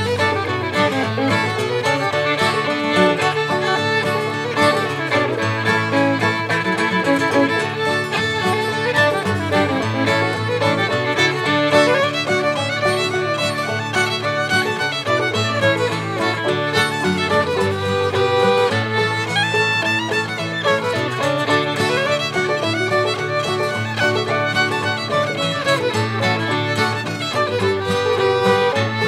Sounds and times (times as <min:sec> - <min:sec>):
Music: 0:00.0 - 0:29.0.